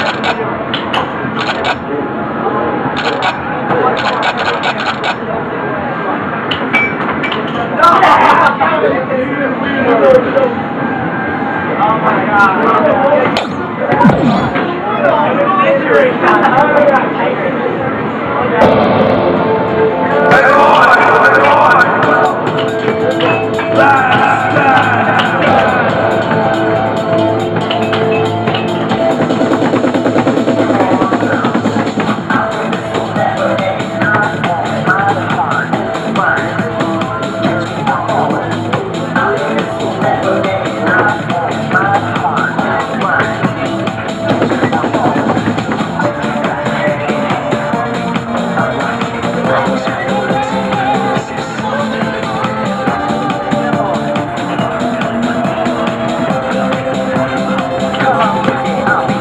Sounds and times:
Speech: 7.4 - 18.8, 20.0 - 22.4, 23.0 - 26.2, 30.5 - 59.2
Music: 13.4 - 16.5, 18.6 - 59.2.

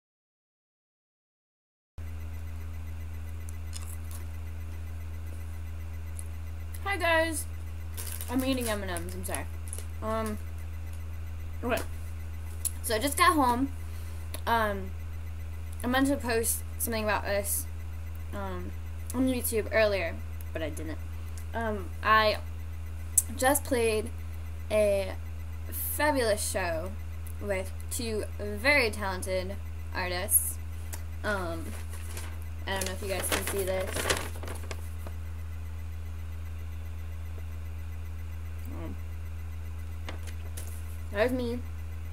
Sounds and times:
Speech: 6.8 - 7.4, 8.3 - 10.4, 12.8 - 13.7, 14.5 - 14.9, 15.8 - 17.6, 18.3 - 21.0, 21.6 - 22.4, 23.2 - 24.1, 24.7 - 30.6, 31.3 - 31.7, 32.7 - 33.9, 41.1 - 41.6.

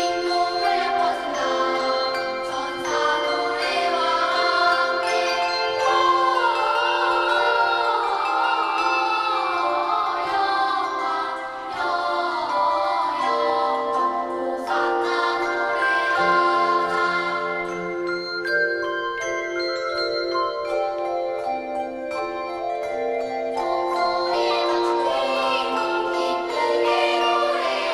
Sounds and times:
Jingle, tinkle: 0.0 - 27.9.

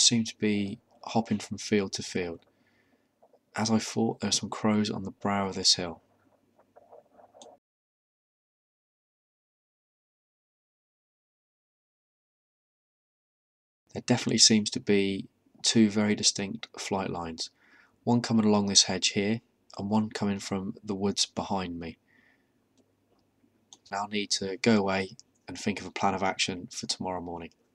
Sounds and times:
Speech: 0.0 - 2.4, 3.6 - 6.0, 13.9 - 22.0, 23.8 - 27.6.

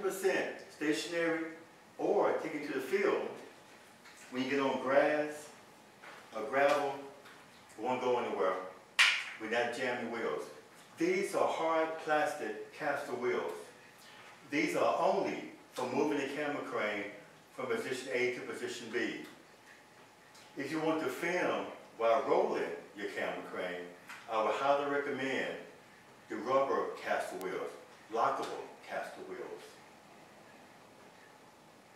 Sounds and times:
Speech: 0.0 - 3.5, 4.2 - 5.6, 6.3 - 7.2, 7.8 - 8.8, 9.4 - 13.8, 14.5 - 19.4, 20.6 - 29.8.

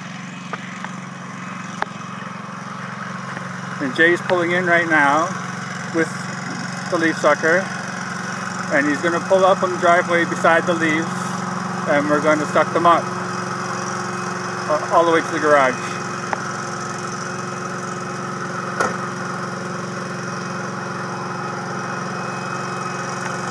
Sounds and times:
Speech: 3.8 - 5.4, 6.0 - 6.2, 6.9 - 7.7, 8.7 - 11.3, 11.9 - 13.1, 14.7 - 16.0.

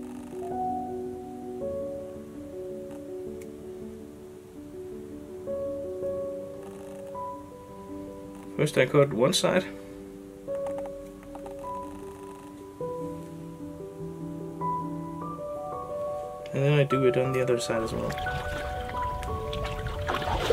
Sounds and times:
Music: 0.0 - 20.5
Speech: 8.6 - 9.7, 16.5 - 18.2.

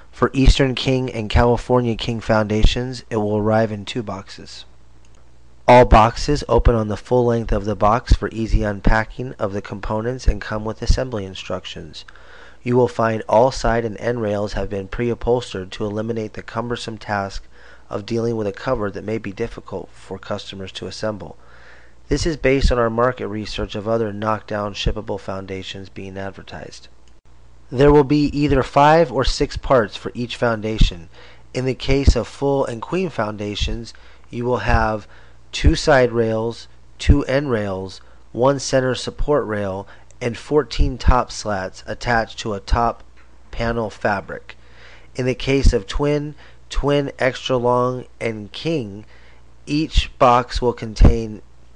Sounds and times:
Speech: 0.2 - 4.7, 5.7 - 21.4, 22.1 - 27.0, 27.7 - 44.6, 45.2 - 49.1, 49.7 - 51.5.

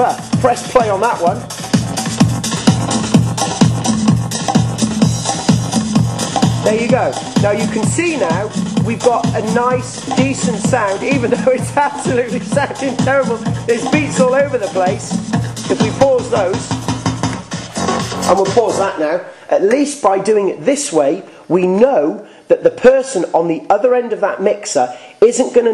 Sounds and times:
Electronic music: 0.0 - 19.1.

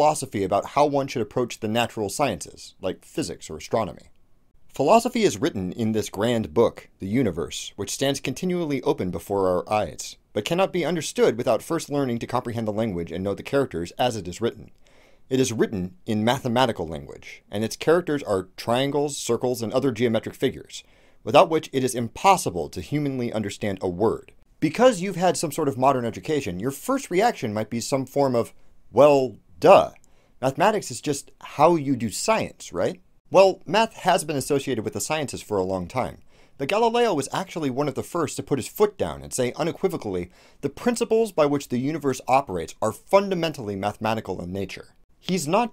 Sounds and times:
Narration, monologue: 0.0 - 45.7.

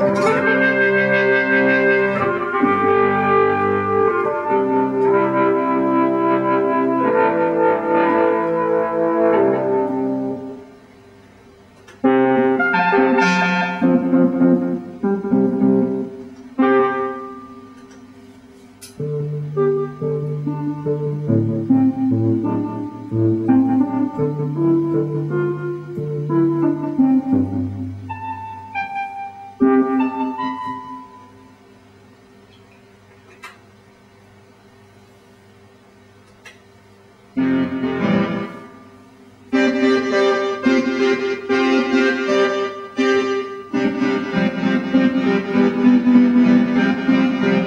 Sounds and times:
Electric piano: 0.0 - 33.7, 37.3 - 47.6.

